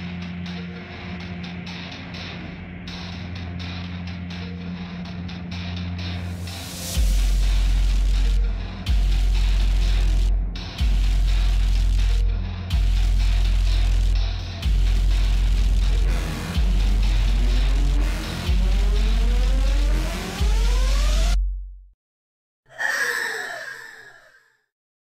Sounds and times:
Music: 0.0s - 22.0s.

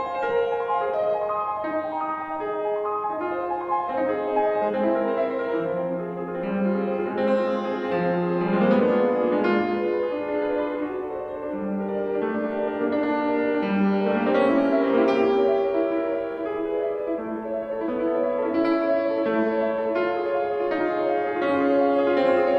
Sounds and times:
Piano: 0.0s - 22.5s.

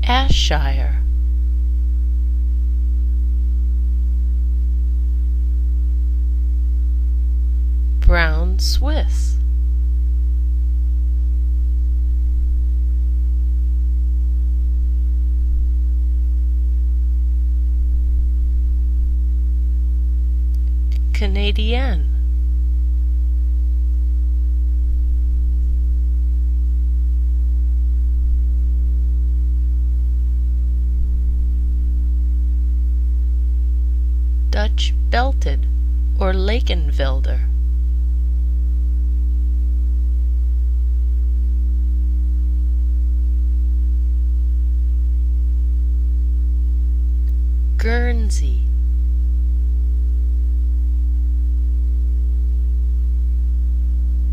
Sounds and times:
Speech: 0.0s - 1.0s, 8.0s - 9.4s, 21.0s - 22.2s, 34.6s - 35.6s, 36.2s - 37.5s, 47.8s - 48.7s.

